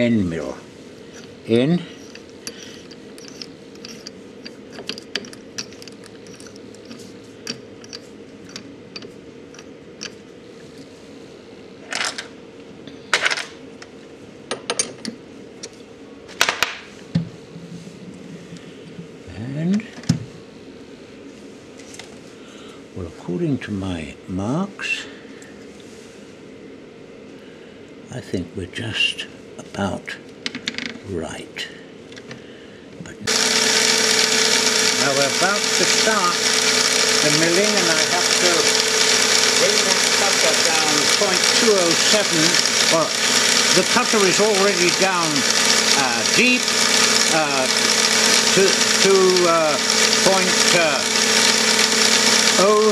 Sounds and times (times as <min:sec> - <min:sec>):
Speech: 0:00.0 - 0:00.7, 0:01.5 - 0:01.9, 0:19.3 - 0:20.0, 0:23.0 - 0:25.1, 0:28.1 - 0:30.2, 0:31.0 - 0:31.8, 0:33.0 - 0:33.3, 0:35.0 - 0:36.4, 0:37.2 - 0:38.7, 0:39.6 - 0:43.1, 0:43.8 - 0:46.7, 0:47.3 - 0:47.7, 0:48.6 - 0:51.0, 0:52.6 - 0:52.9.